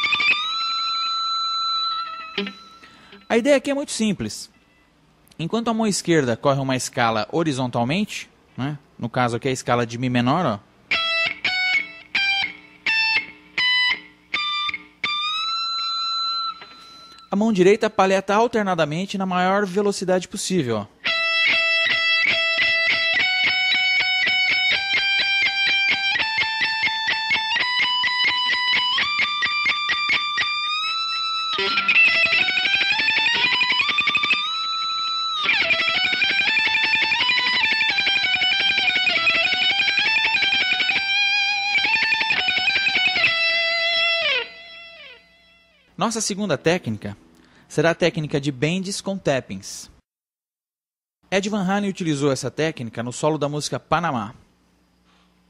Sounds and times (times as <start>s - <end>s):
Electric guitar: 0.0s - 3.3s, 10.9s - 17.3s, 21.0s - 46.0s
Speech: 3.3s - 4.6s, 5.4s - 10.7s, 17.3s - 20.9s, 46.0s - 50.0s, 51.3s - 54.4s.